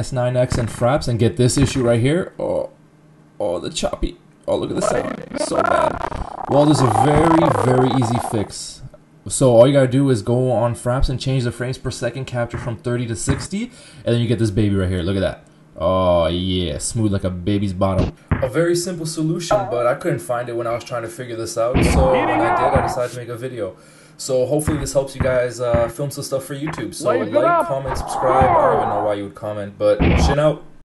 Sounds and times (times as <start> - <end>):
Speech: 0.0 - 2.8, 3.4 - 30.6.